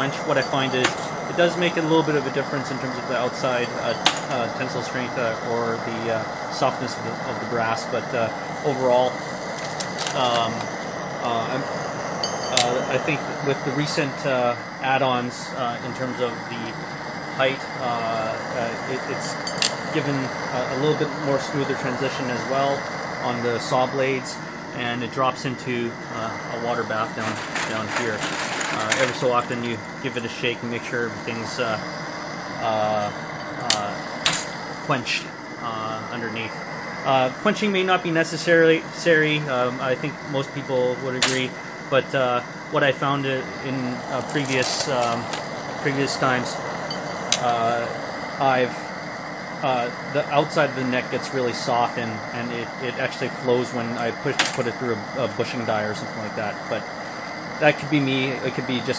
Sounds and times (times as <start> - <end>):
Speech: 0.0 - 9.2, 10.1 - 10.6, 11.2 - 11.7, 12.5 - 16.8, 17.4 - 31.8, 32.6 - 34.0, 34.9 - 46.6, 47.4 - 48.9, 49.6 - 56.8, 57.6 - 58.9.